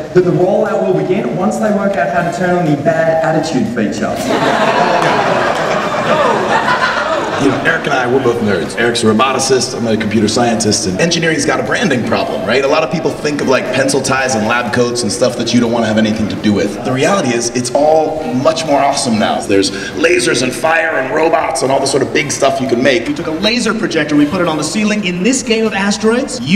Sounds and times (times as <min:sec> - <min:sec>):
Speech: 0:00.0 - 0:04.3, 0:07.4 - 0:26.5.